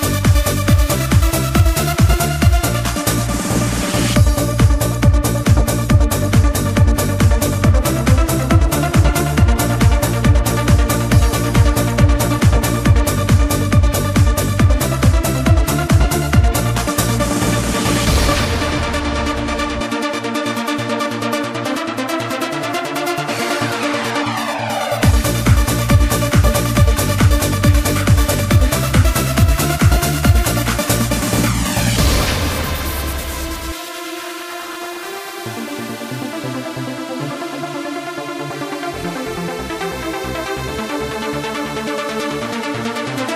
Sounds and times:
Trance music: 0:00.0 - 0:43.3.

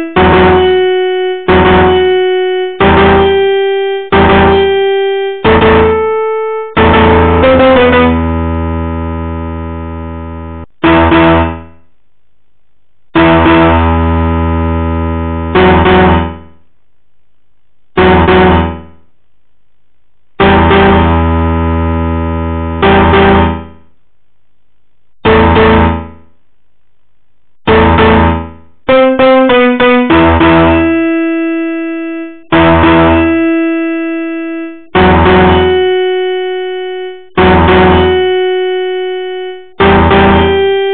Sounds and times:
Music: 0:00.0 - 0:08.9, 0:13.2 - 0:14.3, 0:27.7 - 0:40.9.

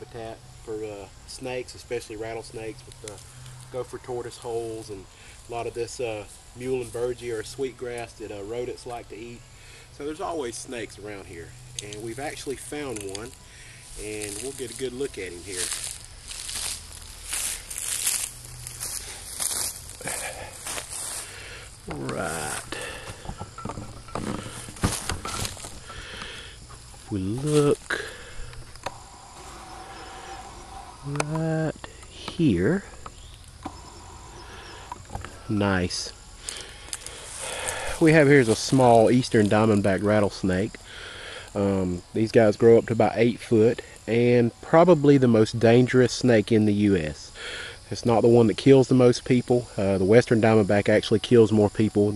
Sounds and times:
Speech: 0:00.0 - 0:09.4, 0:10.0 - 0:13.3, 0:14.0 - 0:15.7, 0:21.9 - 0:22.7, 0:27.1 - 0:28.0, 0:31.0 - 0:32.9, 0:35.5 - 0:36.2, 0:38.0 - 0:40.8, 0:41.6 - 0:47.3, 0:47.9 - 0:52.1
Outside, rural or natural: 0:00.0 - 0:52.1.

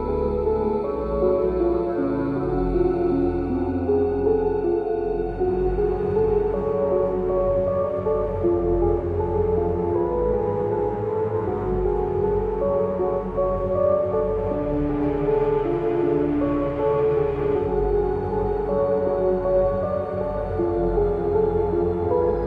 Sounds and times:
Scary music: 0:00.0 - 0:22.4.

